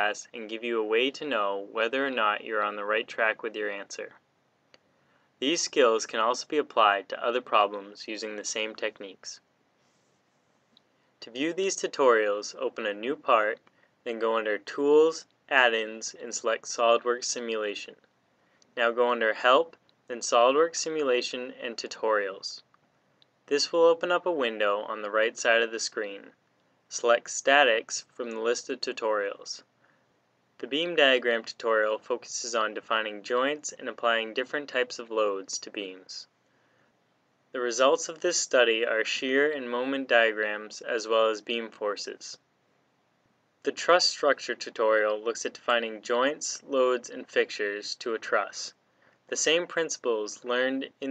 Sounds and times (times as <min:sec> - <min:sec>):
Speech: 0:00.0 - 0:04.2, 0:05.4 - 0:09.5, 0:11.2 - 0:18.0, 0:18.8 - 0:22.7, 0:23.5 - 0:29.7, 0:30.6 - 0:36.3, 0:37.6 - 0:42.4, 0:43.6 - 0:51.1.